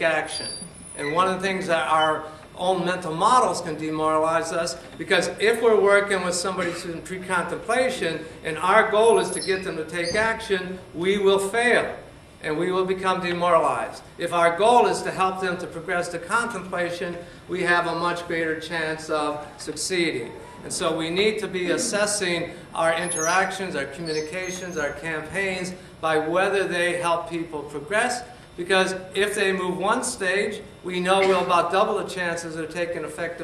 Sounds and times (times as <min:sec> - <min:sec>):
Inside, large room or hall: 0:00.0 - 0:33.4
Speech: 0:00.0 - 0:33.4.